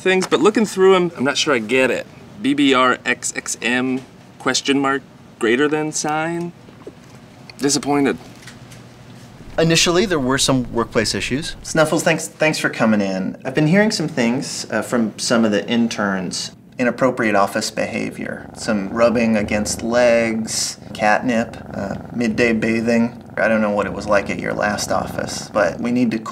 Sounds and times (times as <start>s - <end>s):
Speech: 0.0s - 6.6s, 9.4s - 26.3s.